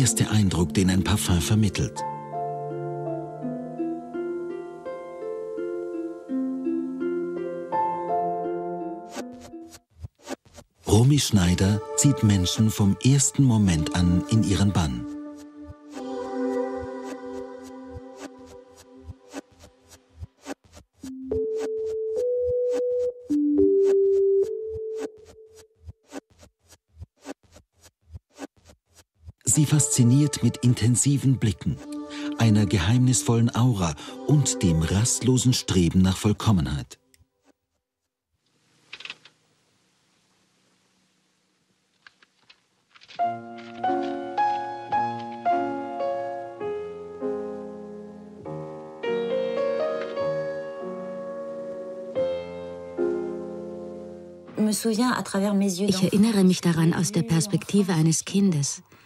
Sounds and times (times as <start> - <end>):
Speech: 0.0 - 2.0, 10.9 - 15.1, 29.5 - 31.8, 32.4 - 37.0, 54.6 - 58.8
Music: 0.0 - 9.7, 11.1 - 19.3, 21.1 - 25.2, 29.5 - 36.4, 43.2 - 54.9.